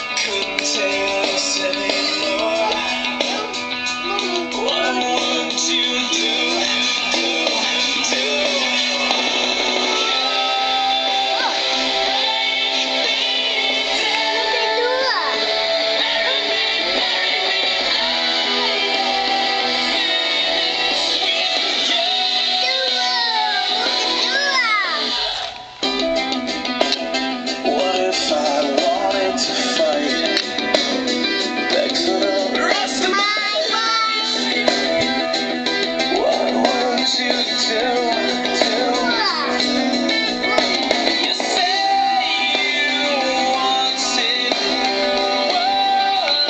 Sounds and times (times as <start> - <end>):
Male singing: 0.0 - 24.3, 27.6 - 30.9, 31.5 - 34.4, 36.1 - 39.8, 40.5 - 46.5
Music: 0.0 - 46.5
Child singing: 1.8 - 6.9, 13.9 - 19.2, 21.9 - 25.2, 32.0 - 34.4, 38.6 - 39.7.